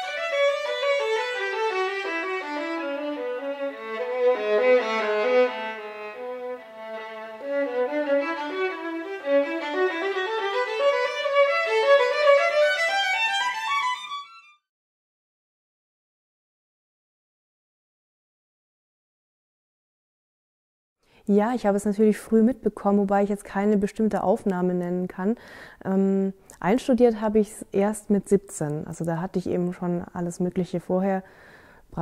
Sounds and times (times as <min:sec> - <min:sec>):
Speech: 0:21.3 - 0:31.2.